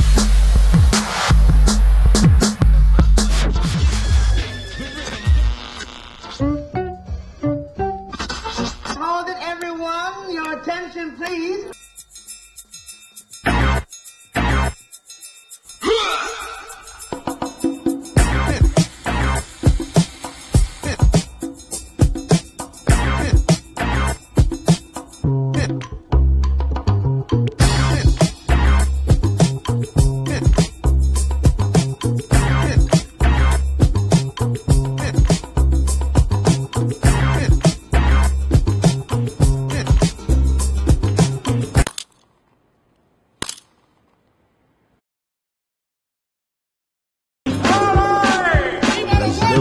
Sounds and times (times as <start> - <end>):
Music: 0.0 - 9.3, 11.3 - 41.9, 47.5 - 49.6.